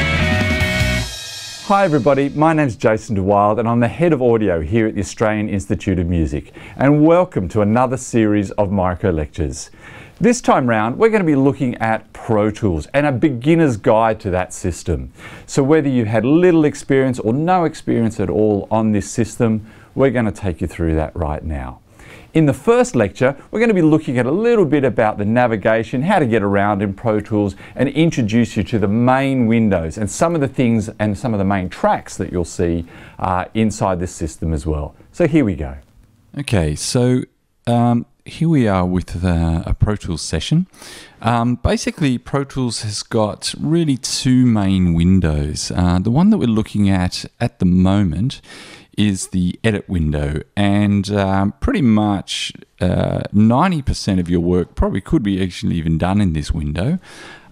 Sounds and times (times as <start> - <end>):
Speech: 1.7 - 57.0.